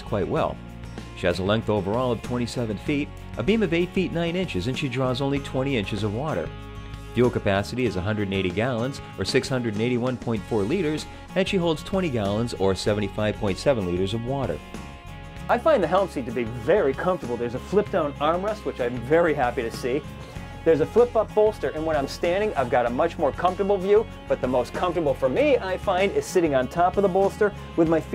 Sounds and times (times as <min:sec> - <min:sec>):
Speech: 0:00.0 - 0:00.6, 0:01.2 - 0:06.5, 0:07.2 - 0:14.6, 0:15.5 - 0:20.0, 0:20.7 - 0:28.1
Music: 0:00.0 - 0:28.1.